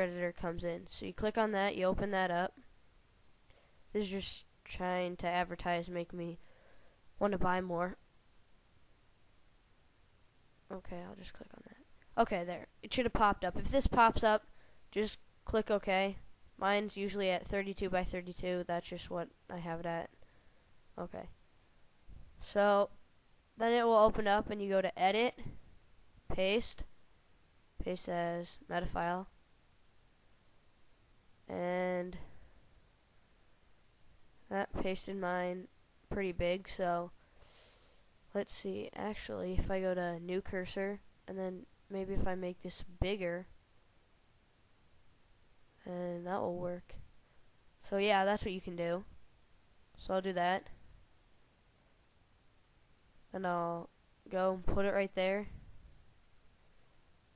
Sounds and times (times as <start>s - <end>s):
Speech: 0.0s - 2.6s, 4.0s - 6.4s, 7.2s - 8.0s, 10.7s - 20.2s, 21.0s - 21.4s, 22.4s - 23.0s, 23.6s - 25.6s, 26.3s - 26.9s, 27.8s - 29.3s, 31.5s - 32.4s, 34.5s - 37.2s, 38.4s - 43.5s, 45.8s - 47.0s, 47.8s - 49.1s, 50.0s - 50.7s, 53.3s - 55.5s.